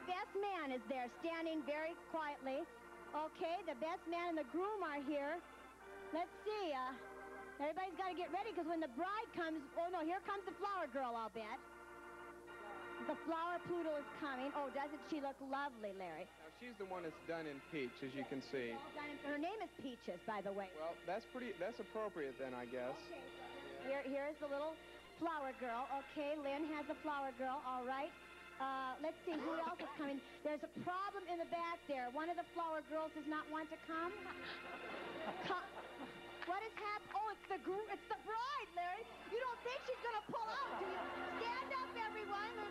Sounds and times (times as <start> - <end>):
Music: 0.0 - 42.7
Speech: 25.3 - 34.2.